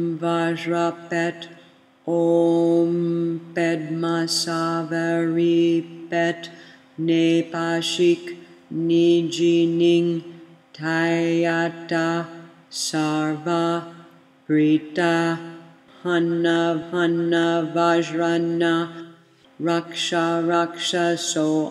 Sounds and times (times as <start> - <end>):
Mantra: 0.0 - 21.7.